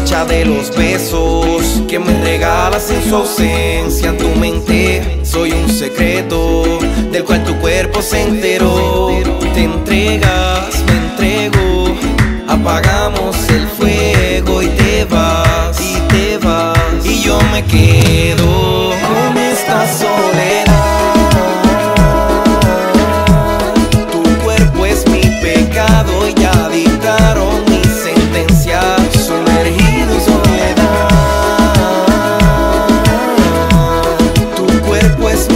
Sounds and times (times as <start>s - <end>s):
Music: 0.0s - 35.5s.